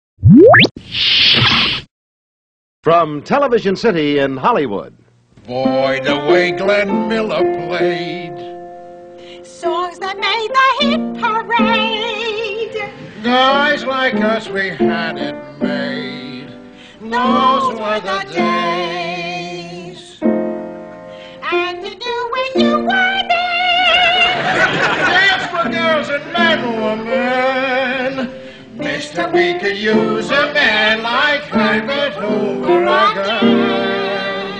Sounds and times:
Speech: 2.8 - 5.6
Music: 5.4 - 34.5.

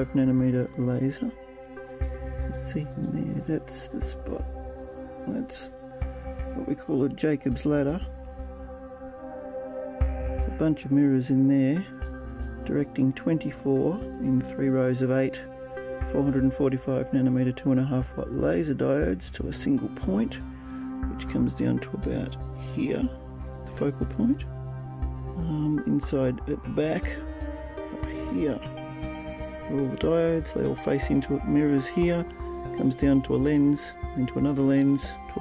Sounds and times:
Speech: 0.0 - 1.4, 2.5 - 4.5, 5.3 - 5.7, 6.6 - 8.0, 10.5 - 12.0, 12.6 - 15.5, 16.1 - 20.4, 21.0 - 24.5, 25.4 - 27.2, 28.1 - 28.7, 29.7 - 35.4
Music: 0.0 - 35.4.

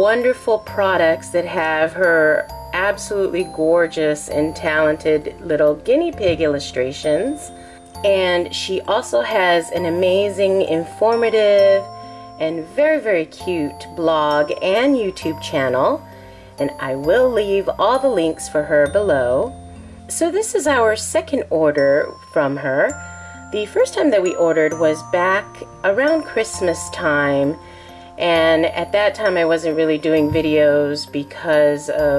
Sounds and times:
Speech: 0.0 - 16.0, 16.6 - 19.5, 20.1 - 22.9, 23.6 - 27.6, 28.2 - 32.1
Music: 0.0 - 32.1.

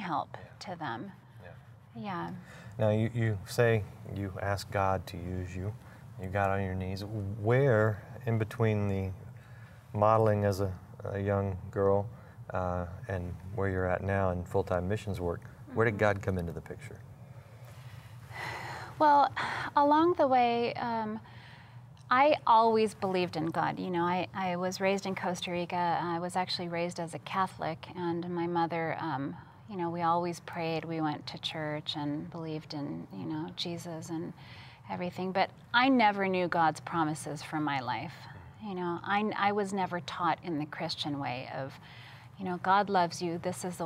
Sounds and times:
Inside, small room: 0.0 - 43.8.

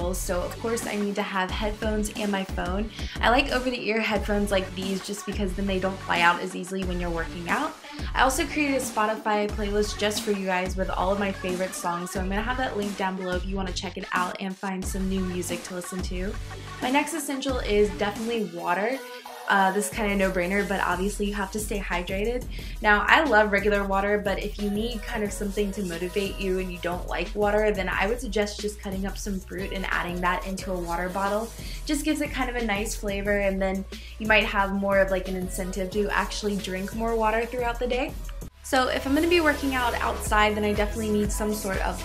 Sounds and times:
Inside, small room: 0.0 - 42.0
Music: 0.0 - 42.0
Speech: 0.0 - 42.0.

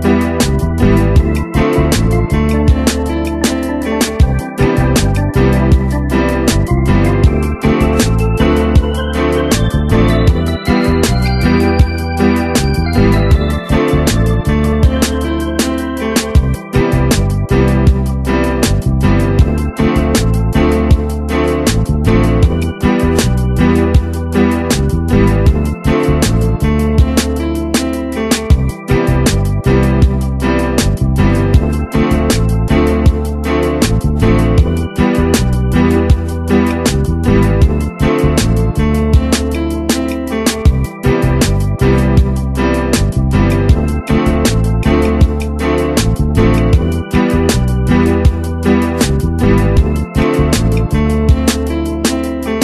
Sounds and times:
Blues: 0.0 - 52.6
Rhythm and blues: 0.0 - 52.6.

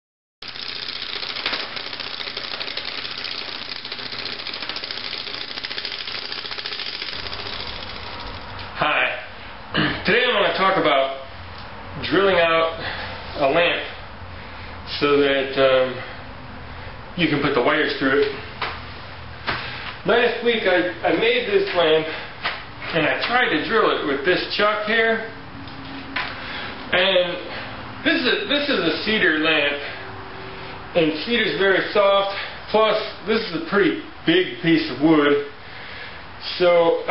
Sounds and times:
Speech: 8.8 - 11.3, 12.0 - 12.8, 13.4 - 14.0, 14.9 - 16.1, 17.2 - 18.4, 20.0 - 22.2, 22.9 - 25.4, 26.9 - 30.0, 31.0 - 35.5, 36.4 - 37.1.

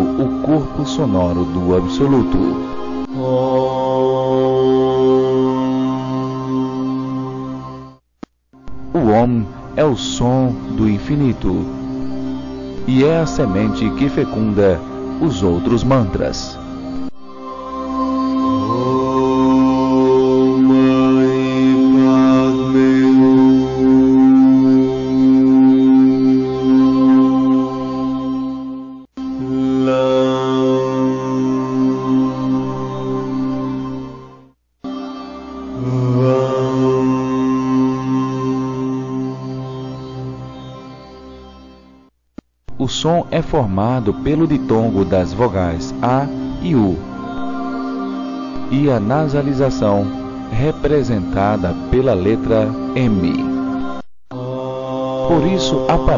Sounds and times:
Speech: 0.0 - 2.6, 8.9 - 11.7, 12.8 - 16.6, 42.7 - 47.1, 48.7 - 53.5, 55.2 - 56.1
Mantra: 0.0 - 8.0, 8.7 - 12.1, 12.8 - 28.6, 29.2 - 34.4, 35.6 - 40.5, 42.7 - 56.1.

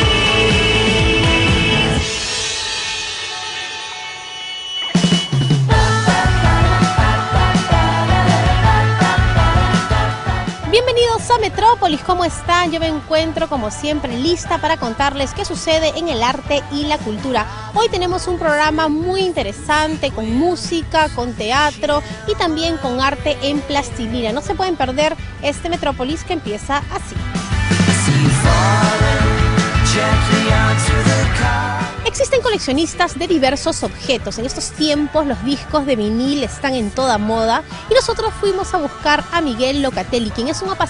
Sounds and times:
Music: 0.0 - 40.9
Speech: 10.7 - 27.2, 32.1 - 40.9.

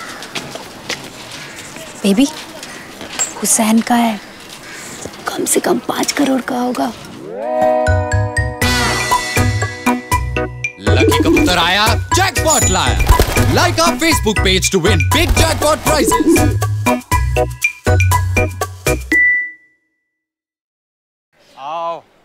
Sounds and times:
Music: 7.4 - 19.9.

